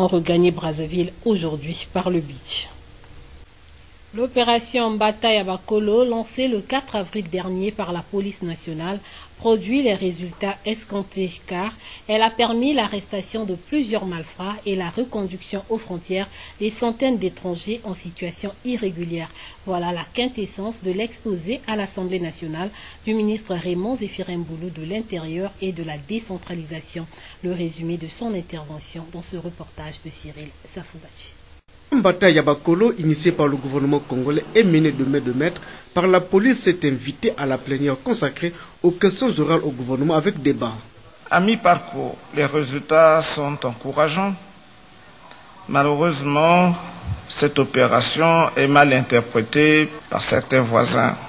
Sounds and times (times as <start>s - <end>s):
Speech: 0.0s - 2.8s, 4.2s - 44.5s, 45.2s - 51.2s.